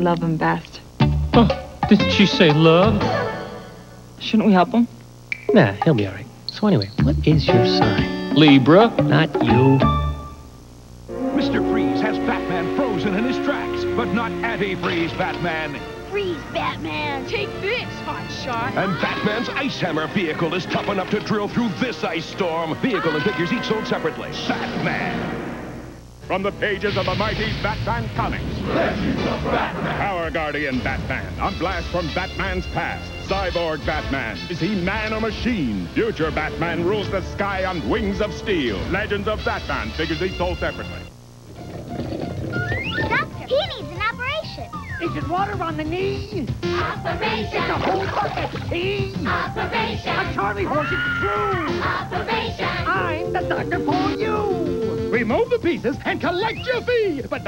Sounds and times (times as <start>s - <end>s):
Music: 0.0s - 4.1s, 5.4s - 57.4s
Speech: 11.4s - 15.8s, 26.3s - 28.4s.